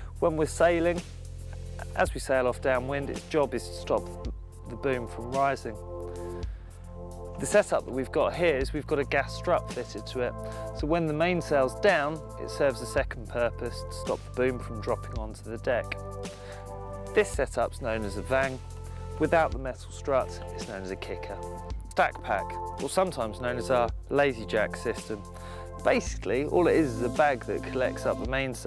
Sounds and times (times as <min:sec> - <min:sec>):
Music: 0:00.0 - 0:28.6
Speech: 0:00.2 - 0:01.0, 0:01.8 - 0:05.8, 0:07.4 - 0:16.0, 0:17.2 - 0:18.6, 0:19.2 - 0:28.6.